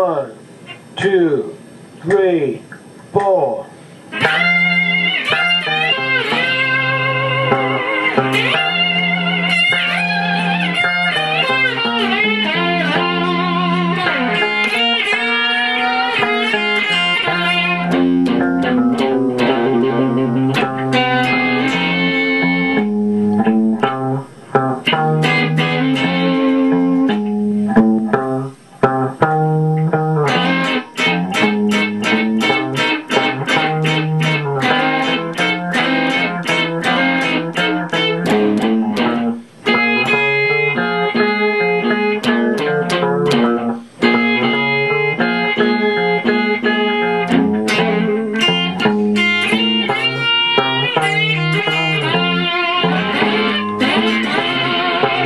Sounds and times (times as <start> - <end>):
Electric guitar: 0.0 - 55.2
Tapping (guitar technique): 0.0 - 55.2
Steel guitar, slide guitar: 4.1 - 55.2
Bowed string instrument: 4.2 - 55.2.